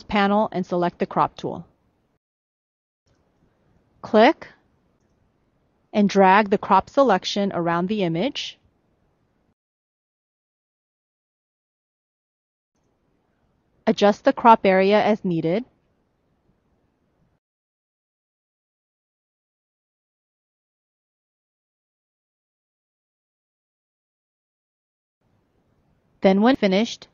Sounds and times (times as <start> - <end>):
Speech: 0.0 - 1.7, 4.1 - 4.6, 6.0 - 8.6, 13.9 - 15.7, 26.2 - 27.1
Inside, small room: 0.0 - 2.2, 3.1 - 9.6, 12.8 - 17.4, 25.2 - 27.1.